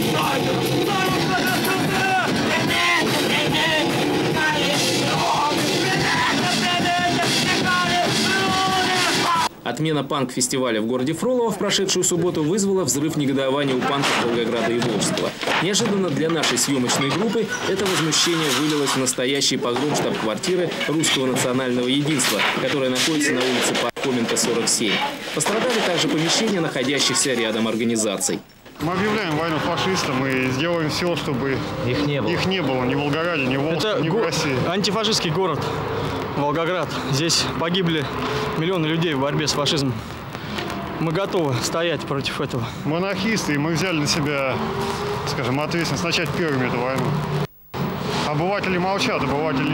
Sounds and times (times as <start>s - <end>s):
Outside, urban or manmade: 0.0s - 9.7s, 29.0s - 49.7s
Speech: 0.0s - 35.6s, 36.4s - 40.0s, 41.0s - 44.6s, 45.3s - 47.1s, 48.2s - 49.7s.